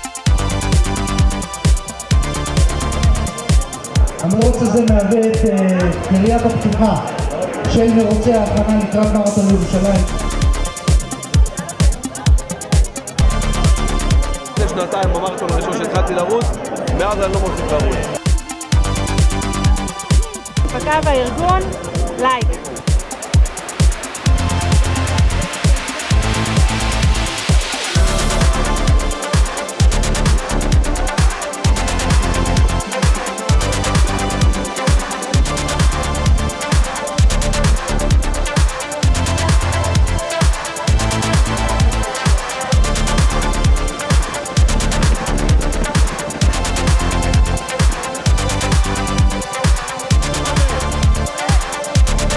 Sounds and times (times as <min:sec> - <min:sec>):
Crowd: 0:00.0 - 0:52.3
Music: 0:00.0 - 0:52.3
Speech: 0:04.2 - 0:10.1, 0:20.7 - 0:22.6.